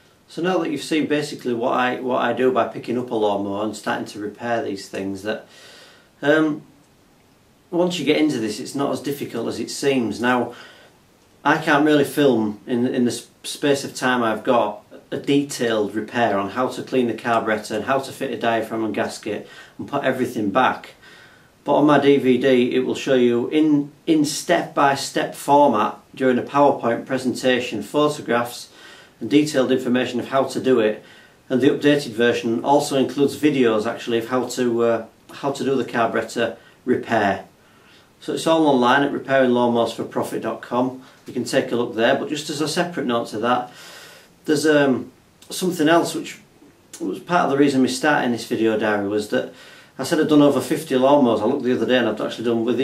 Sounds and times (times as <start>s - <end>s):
Speech: 0.3s - 5.5s, 6.2s - 6.7s, 7.7s - 10.6s, 11.4s - 21.0s, 21.6s - 37.5s, 38.2s - 43.8s, 44.4s - 52.8s.